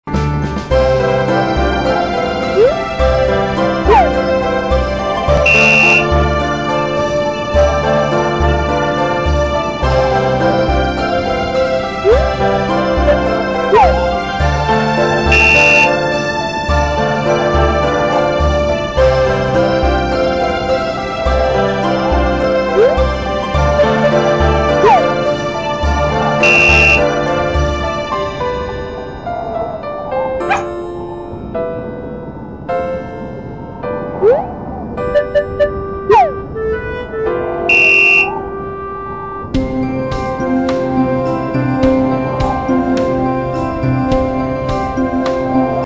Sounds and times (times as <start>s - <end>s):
Electric piano: 17.8s - 45.8s.